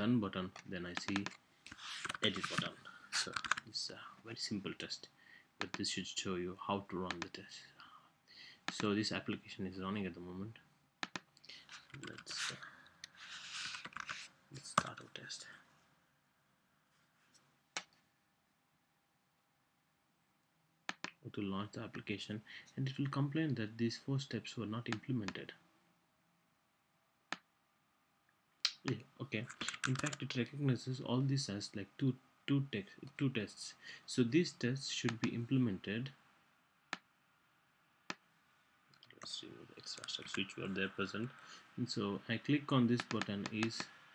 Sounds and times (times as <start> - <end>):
Speech: 0.0 - 1.4, 2.1 - 7.9, 8.7 - 10.7, 11.6 - 12.8, 14.6 - 15.7, 21.1 - 25.6, 28.7 - 36.2, 39.1 - 44.0.